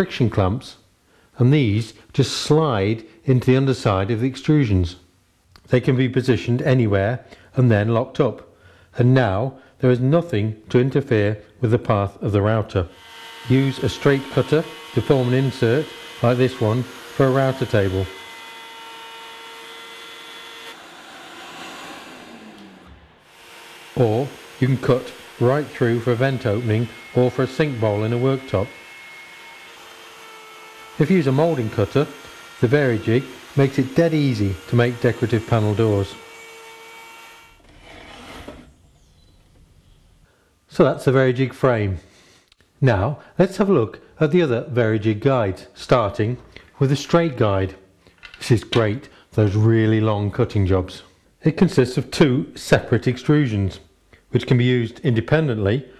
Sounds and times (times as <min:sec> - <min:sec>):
Speech: 0:00.0 - 0:00.8, 0:01.4 - 0:18.2, 0:24.0 - 0:28.8, 0:31.0 - 0:36.2, 0:40.7 - 0:42.1, 0:42.8 - 0:47.8, 0:48.4 - 0:55.9
Power tool: 0:12.9 - 0:38.6.